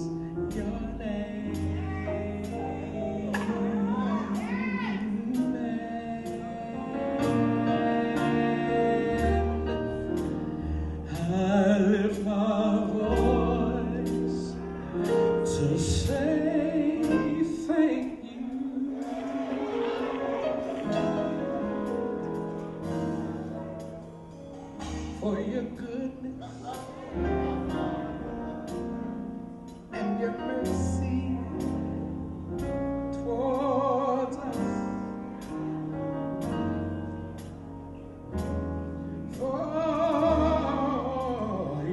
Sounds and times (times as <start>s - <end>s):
Male singing: 0.0s - 10.4s, 11.1s - 14.6s, 15.4s - 19.3s, 25.0s - 26.8s, 29.9s - 32.0s, 33.0s - 35.2s, 39.3s - 41.9s
Music: 0.0s - 41.9s.